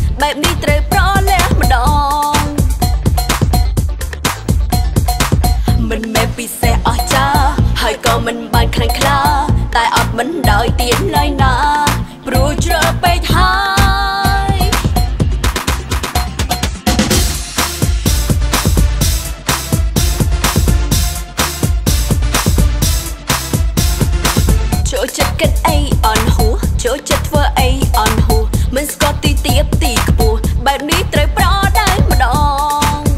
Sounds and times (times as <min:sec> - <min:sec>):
Music: 0:00.0 - 0:33.1.